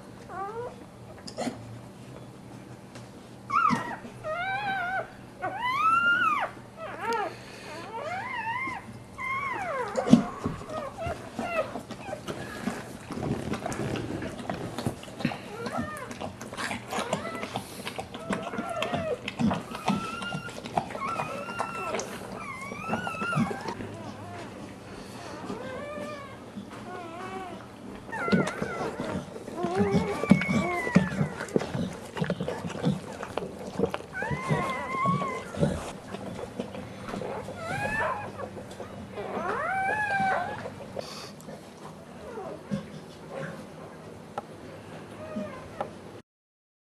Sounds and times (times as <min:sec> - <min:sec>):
Inside, small room: 0:00.0 - 0:46.2
Canidae, dogs, wolves: 0:00.2 - 0:01.7, 0:03.4 - 0:46.2
Dog: 0:00.3 - 0:00.8, 0:03.5 - 0:44.1, 0:45.2 - 0:46.0.